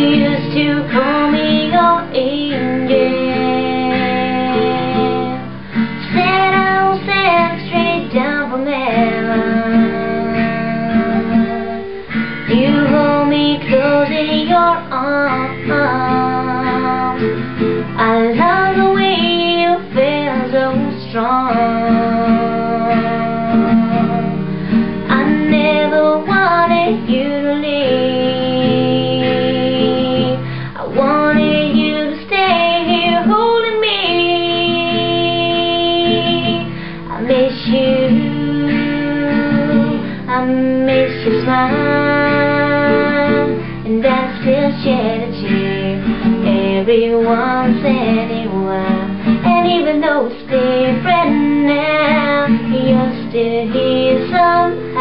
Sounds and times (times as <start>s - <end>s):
Guitar: 0.0s - 55.0s.